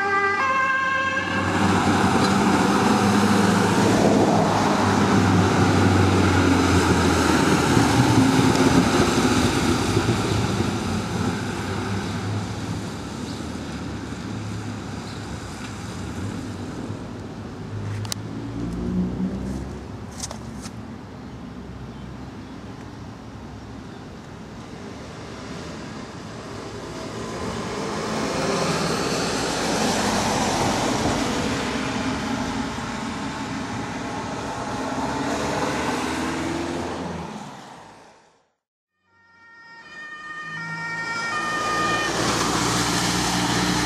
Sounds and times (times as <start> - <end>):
Truck: 1.2 - 38.4, 40.7 - 43.8.